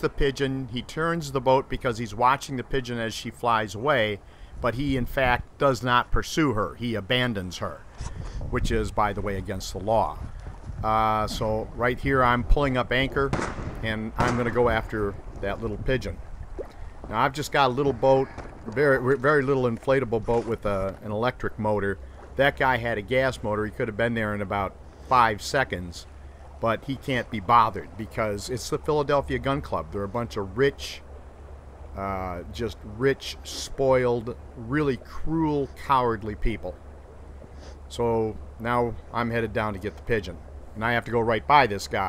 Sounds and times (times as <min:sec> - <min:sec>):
Speech: 0:00.0 - 0:07.9, 0:08.5 - 0:16.2, 0:17.1 - 0:31.0, 0:32.0 - 0:36.8, 0:37.9 - 0:42.0.